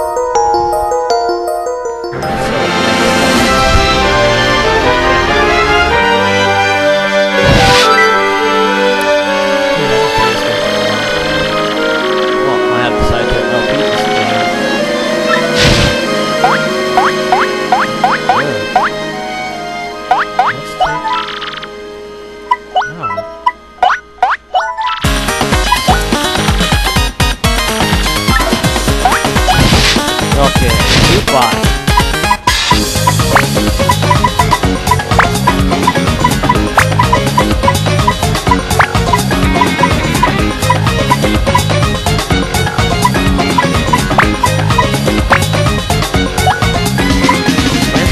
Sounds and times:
Music: 0.0s - 48.1s
Speech: 12.4s - 14.3s, 20.5s - 21.0s, 22.9s - 23.2s, 30.3s - 31.7s.

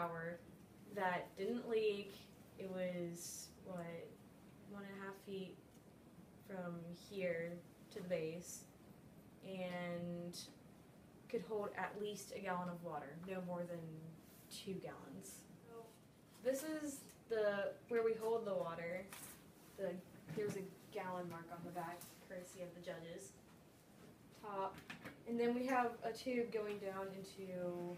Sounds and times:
Speech: 0.0s - 5.6s, 6.5s - 8.7s, 9.4s - 10.6s, 11.3s - 19.1s, 19.8s - 23.4s, 24.4s - 27.9s.

